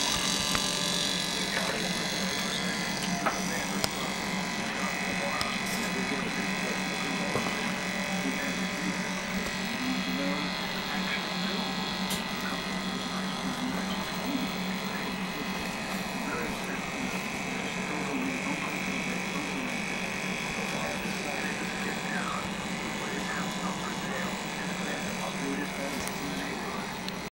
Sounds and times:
Speech: 1.2 - 27.3.

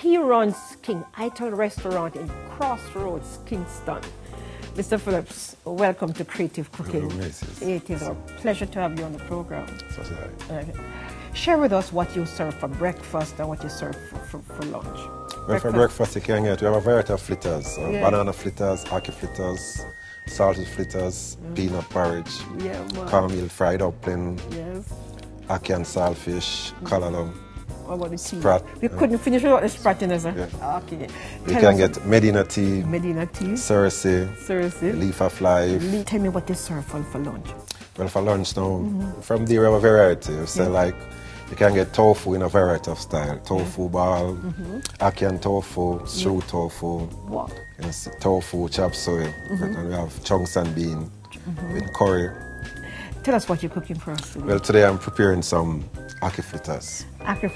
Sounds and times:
Music: 0.0 - 57.5.

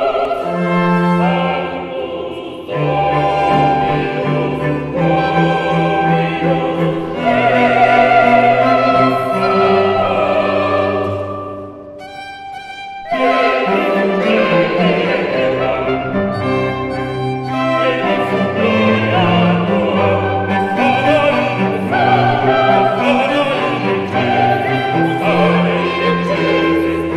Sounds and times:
Cello: 0.0 - 27.1
Opera: 0.0 - 27.1
Violin, fiddle: 0.0 - 27.1.

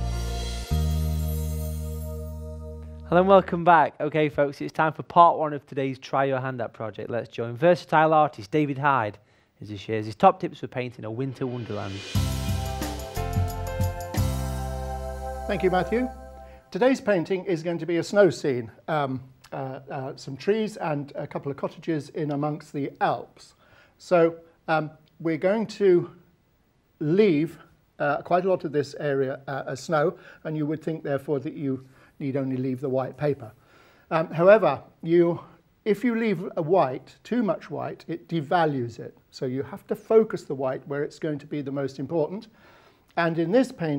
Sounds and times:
Speech: 3.1 - 12.1, 15.5 - 16.1, 16.7 - 26.2, 27.0 - 42.5, 43.2 - 43.9.

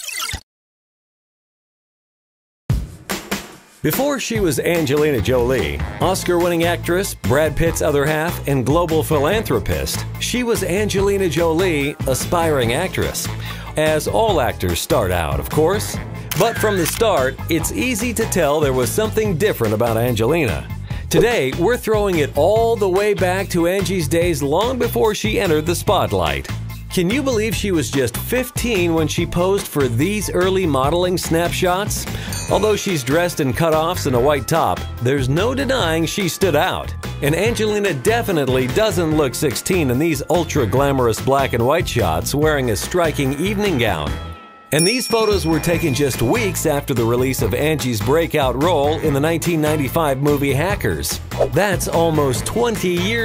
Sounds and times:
Music: 2.7 - 53.2
Speech: 3.9 - 44.2, 44.8 - 53.2.

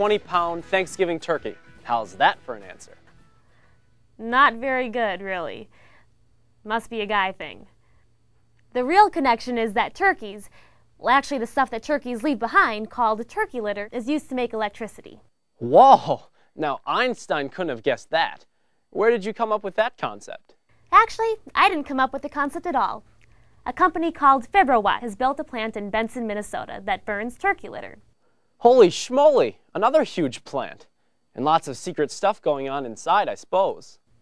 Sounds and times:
Speech: 8.8 - 23.0, 28.6 - 34.0.

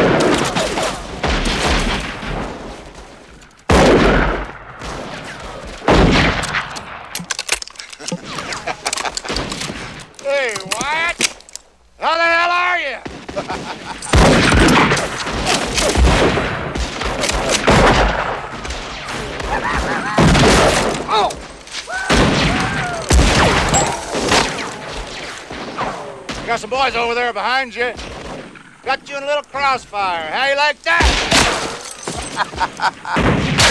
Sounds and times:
Fusillade: 0.0 - 2.6, 13.2 - 21.1, 22.1 - 26.5, 33.2 - 33.7
Outside, rural or natural: 0.0 - 33.7.

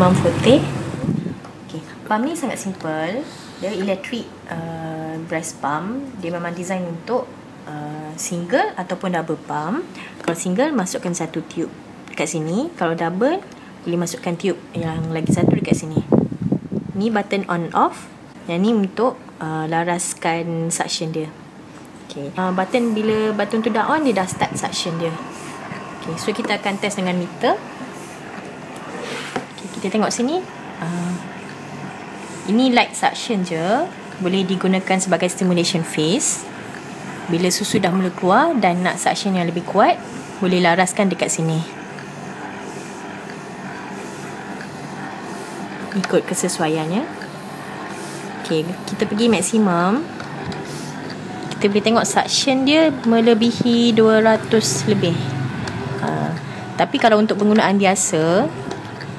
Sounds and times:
Speech: 0.0 - 0.8, 1.7 - 16.1, 17.0 - 21.4, 22.1 - 25.3, 26.0 - 27.6, 29.6 - 31.3, 32.5 - 36.5, 37.3 - 41.8, 45.9 - 47.2, 48.4 - 50.1, 51.6 - 55.3, 56.0 - 58.6.

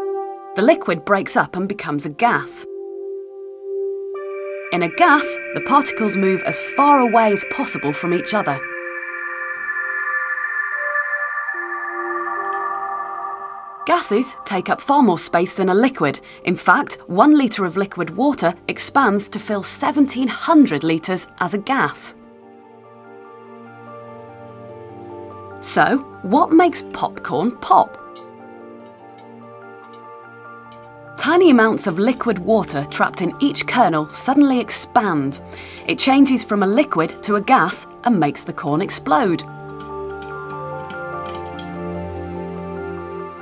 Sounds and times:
Music: 0.0 - 43.4
Speech: 0.6 - 2.7, 4.7 - 8.6, 13.9 - 22.2, 25.6 - 28.0, 31.2 - 39.5.

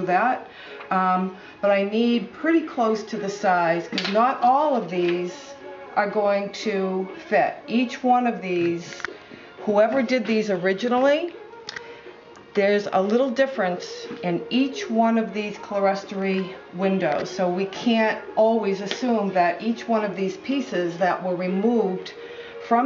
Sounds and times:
Speech: 0.0 - 11.4, 12.6 - 22.8.

